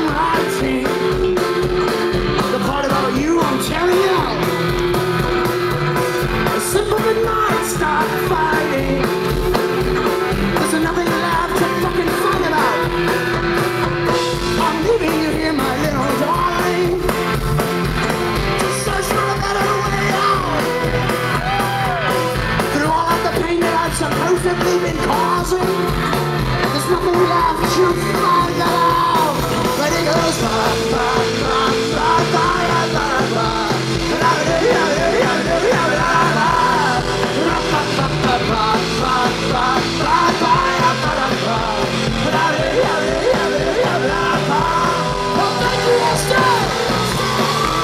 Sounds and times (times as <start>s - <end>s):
Music: 0.0s - 47.8s.